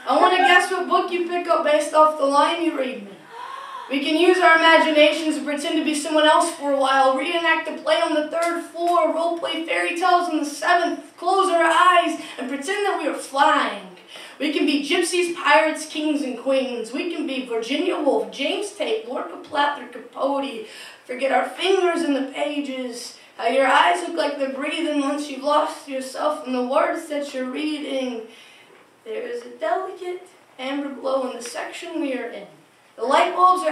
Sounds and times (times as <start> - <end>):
Speech: 0.0 - 28.3, 29.0 - 33.7.